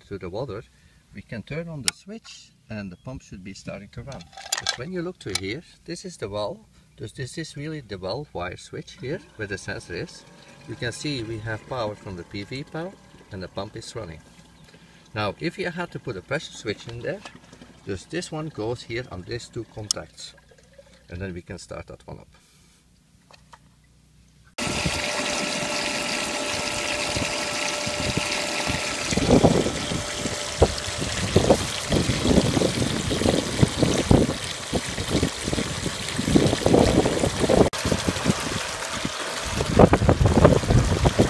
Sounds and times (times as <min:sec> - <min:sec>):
Water: 0:08.9 - 0:21.3, 0:23.5 - 0:41.2
Water tap, faucet: 0:09.3 - 0:13.5, 0:24.6 - 0:41.2.